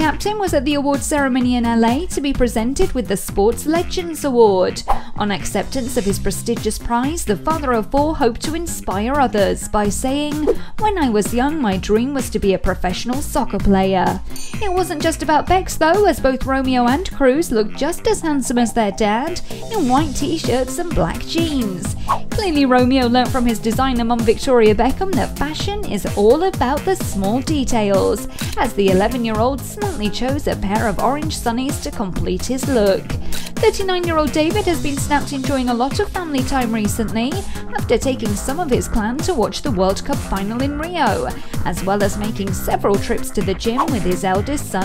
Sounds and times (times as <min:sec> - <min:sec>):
Music: 0:00.0 - 0:44.8
Speech: 0:00.0 - 0:44.8.